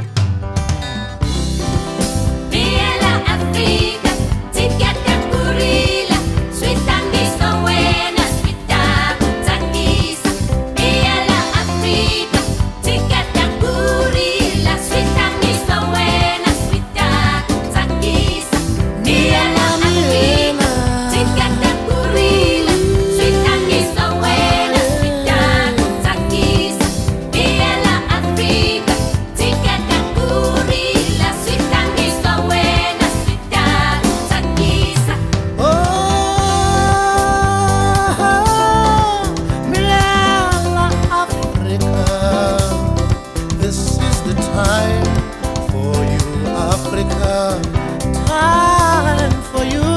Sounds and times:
Music: 0.0 - 49.9.

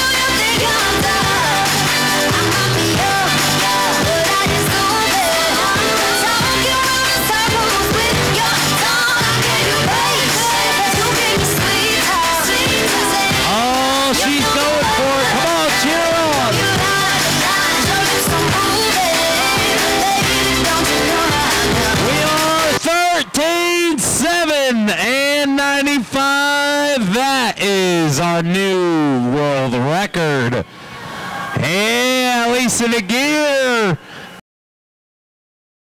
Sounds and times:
Music: 0.0 - 24.4
Speech: 13.5 - 16.6, 22.1 - 30.7, 31.6 - 34.0.

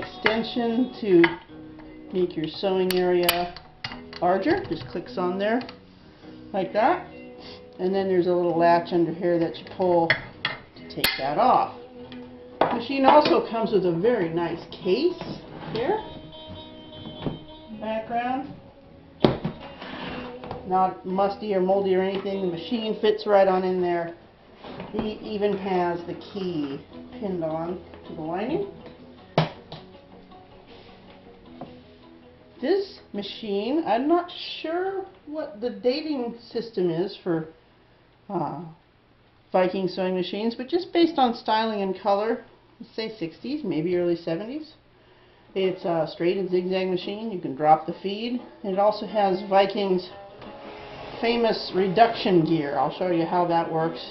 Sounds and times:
Speech: 0.0 - 1.4, 2.1 - 3.6, 4.2 - 5.7, 6.5 - 7.1, 7.8 - 10.2, 10.9 - 11.8, 12.7 - 16.1, 17.7 - 18.6, 20.7 - 24.2, 24.9 - 28.7, 32.6 - 37.6, 38.3 - 38.8, 39.5 - 44.8, 45.6 - 50.1, 51.2 - 54.1
Music: 0.0 - 36.6, 45.2 - 54.1.

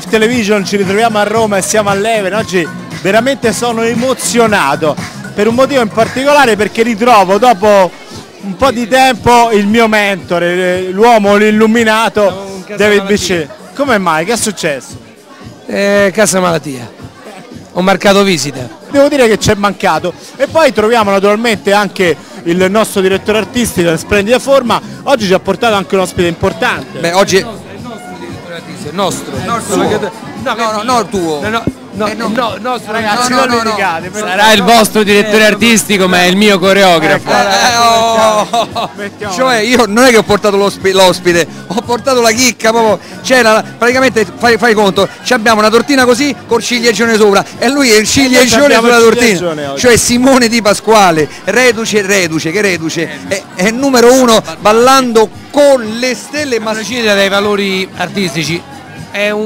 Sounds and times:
Speech: 0.0 - 59.4.

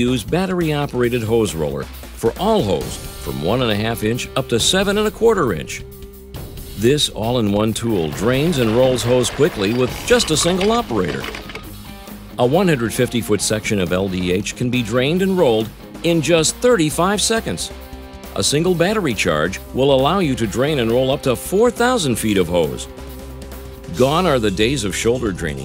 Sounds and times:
Speech: 0.0 - 5.8, 6.8 - 11.4, 12.4 - 17.7, 18.4 - 22.9, 23.9 - 25.6
Music: 0.0 - 25.6.

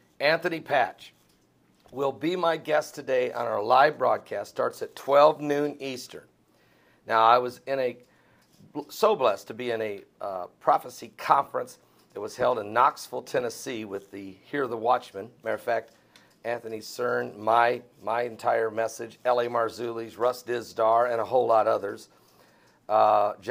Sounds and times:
Speech: 0.2 - 1.2, 1.9 - 6.3, 7.1 - 8.0, 8.7 - 15.9, 16.5 - 22.1, 22.9 - 23.5.

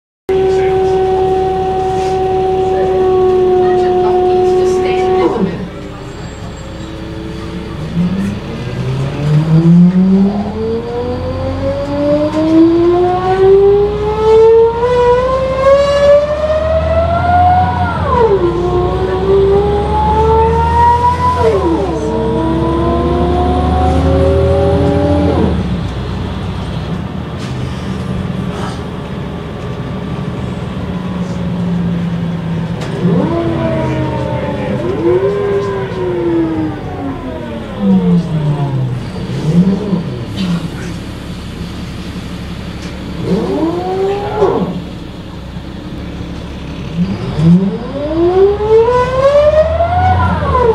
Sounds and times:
Bus: 0.3 - 50.7.

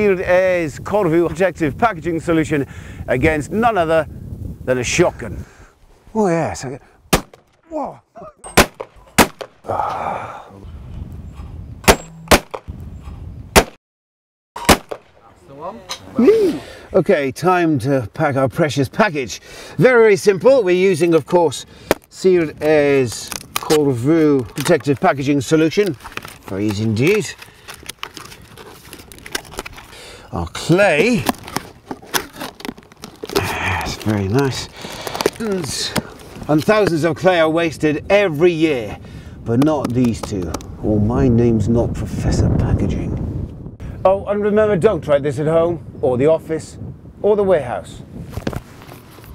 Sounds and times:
Speech: 0.0 - 4.1, 4.7 - 5.4, 6.1 - 6.8, 15.2 - 27.4, 30.3 - 31.3, 33.4 - 34.7, 35.4 - 43.2, 44.0 - 48.0.

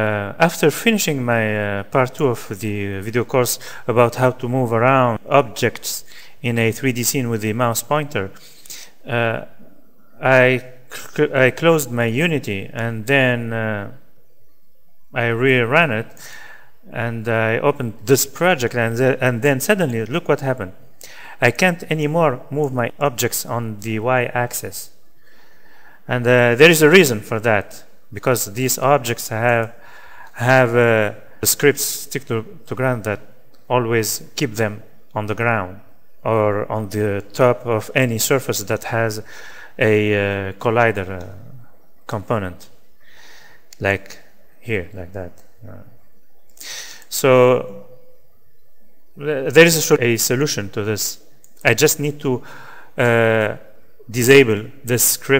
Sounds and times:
Speech: 0.0 - 8.4, 9.0 - 14.0, 15.1 - 16.2, 16.9 - 20.8, 21.4 - 25.0, 26.1 - 42.7, 43.8 - 46.0, 47.1 - 47.9, 49.2 - 52.4, 53.0 - 55.3.

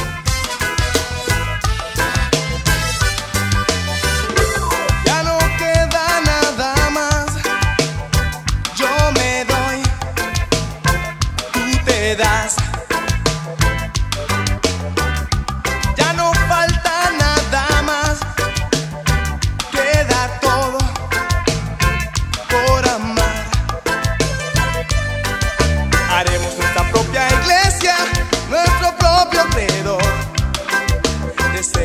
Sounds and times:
Music: 0.0 - 31.8.

